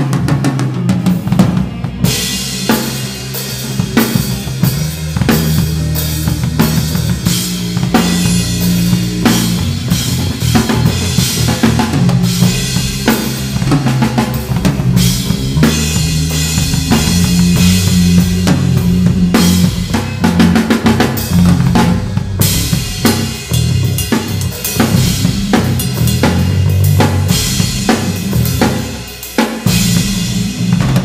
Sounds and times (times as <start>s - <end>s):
Bass drum: 0.0s - 29.0s, 29.6s - 31.0s
Drum kit: 0.0s - 31.0s
Drum roll: 0.0s - 31.0s.